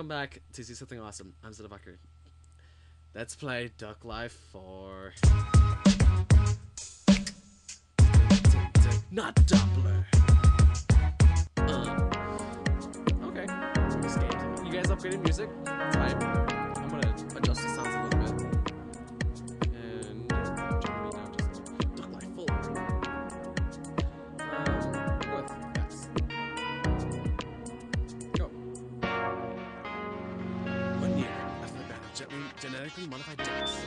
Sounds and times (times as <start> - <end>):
Music: 5.1 - 33.8.